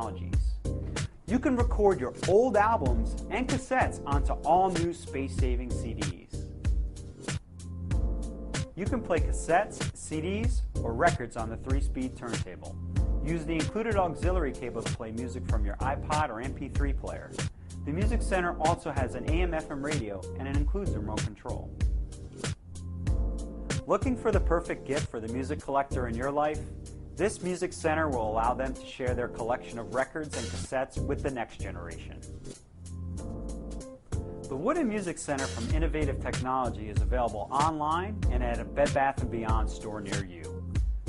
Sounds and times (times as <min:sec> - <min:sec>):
Speech: 0:00.0 - 0:00.6, 0:01.3 - 0:06.4, 0:08.8 - 0:21.7, 0:23.8 - 0:32.2, 0:34.5 - 0:40.5
Music: 0:00.0 - 0:41.0.